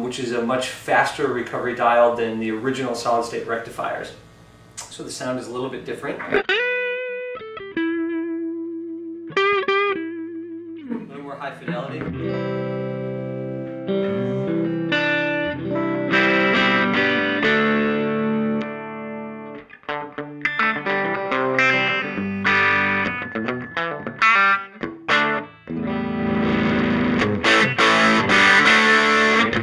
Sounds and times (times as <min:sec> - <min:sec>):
Speech: 0:00.0 - 0:04.2, 0:04.8 - 0:06.4, 0:10.8 - 0:12.2
Guitar: 0:00.0 - 0:29.6
Inside, small room: 0:00.0 - 0:29.6.